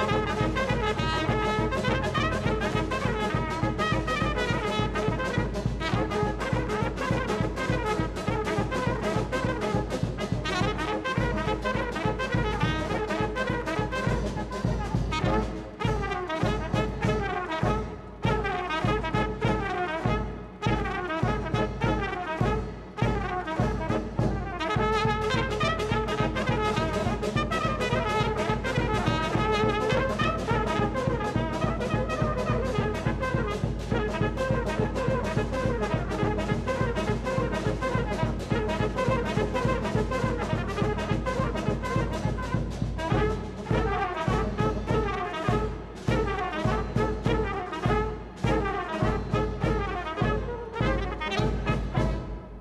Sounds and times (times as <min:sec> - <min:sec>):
Trombone: 0:00.0 - 0:52.6
Trumpet: 0:00.0 - 0:52.6.